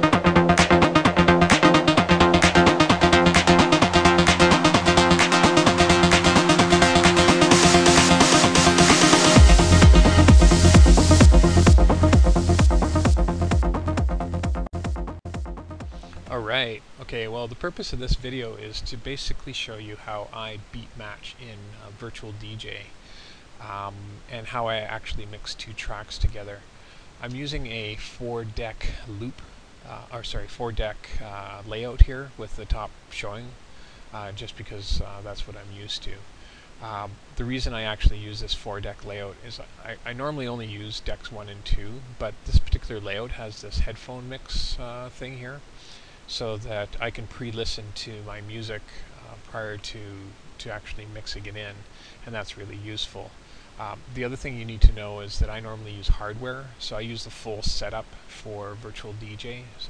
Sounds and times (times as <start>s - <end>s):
Speech: 16.2s - 23.0s, 23.6s - 45.7s, 46.3s - 59.9s.